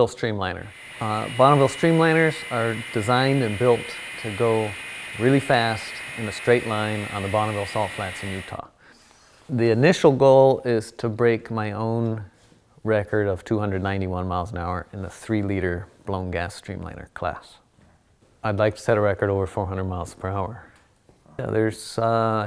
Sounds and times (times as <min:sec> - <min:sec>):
Speech: 0:00.0 - 0:08.7, 0:09.5 - 0:17.7, 0:18.4 - 0:20.7, 0:21.3 - 0:22.4.